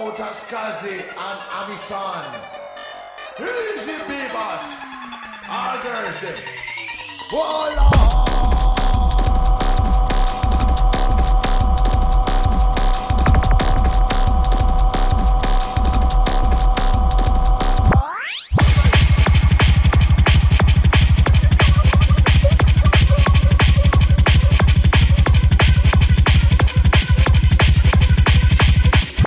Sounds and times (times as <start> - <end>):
Music: 0.0 - 29.2.